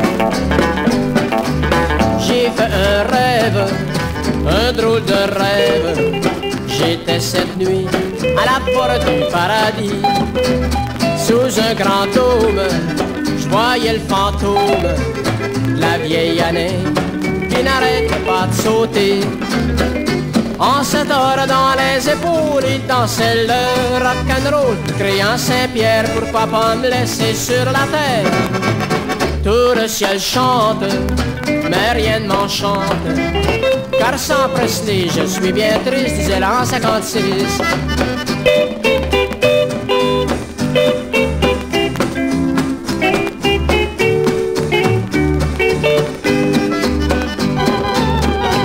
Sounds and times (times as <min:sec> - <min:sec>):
Rock and roll: 0:00.0 - 0:48.6.